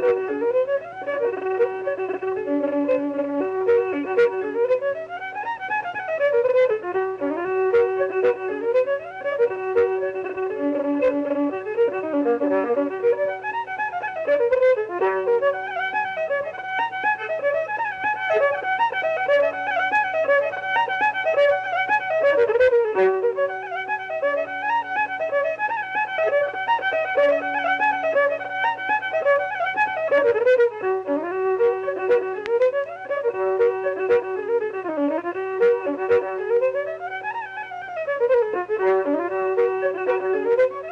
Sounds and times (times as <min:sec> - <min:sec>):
Violin, fiddle: 0:00.0 - 0:40.9.